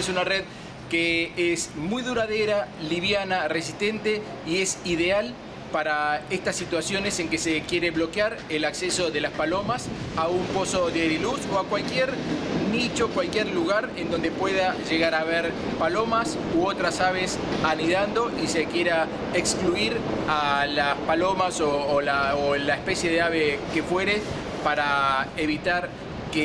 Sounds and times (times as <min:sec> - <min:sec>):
Male speech, man speaking: 0:00.0 - 0:26.4
Outside, urban or manmade: 0:00.0 - 0:26.4.